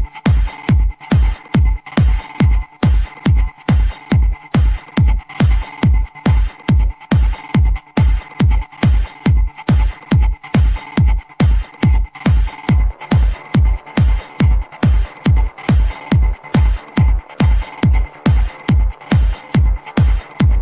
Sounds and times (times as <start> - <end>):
Music: 0.0 - 20.6.